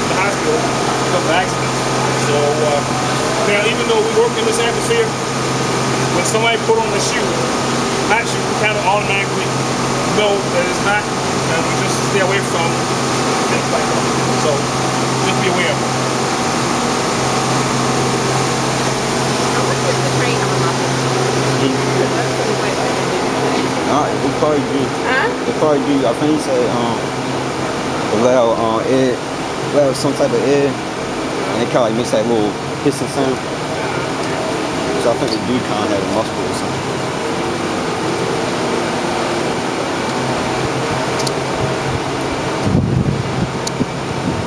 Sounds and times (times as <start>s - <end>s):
Speech: 0.0s - 5.2s, 6.1s - 7.5s, 8.1s - 12.8s, 13.4s - 14.6s, 15.2s - 15.8s, 19.5s - 20.9s, 21.6s - 27.1s, 28.1s - 30.8s, 31.4s - 34.4s, 35.0s - 36.8s.